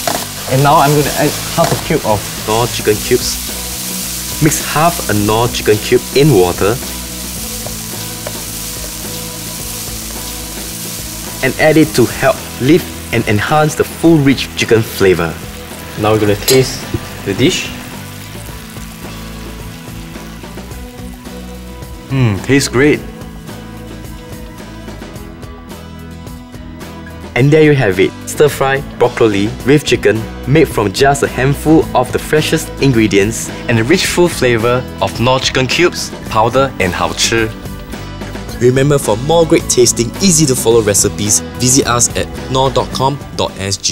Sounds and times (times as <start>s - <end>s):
Sizzle: 0.0s - 26.4s
Music: 0.0s - 43.9s
Speech: 0.5s - 3.4s, 4.4s - 6.8s, 11.4s - 15.4s, 16.0s - 17.8s, 22.1s - 23.1s, 27.4s - 37.6s, 38.5s - 43.9s.